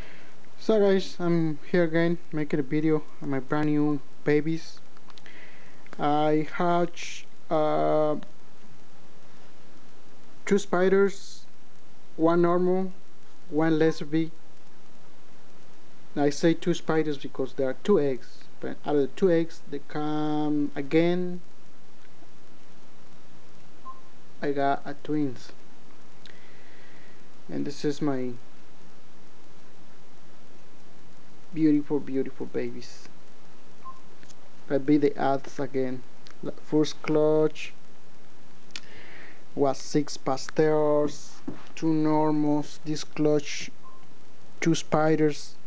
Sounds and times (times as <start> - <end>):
Inside, small room: 0.0 - 45.6
Speech: 0.6 - 4.8, 6.0 - 8.3, 10.4 - 11.5, 12.2 - 14.4, 16.2 - 21.5, 24.4 - 25.6, 27.5 - 28.4, 31.5 - 33.1, 34.7 - 37.8, 39.6 - 43.8, 44.6 - 45.6.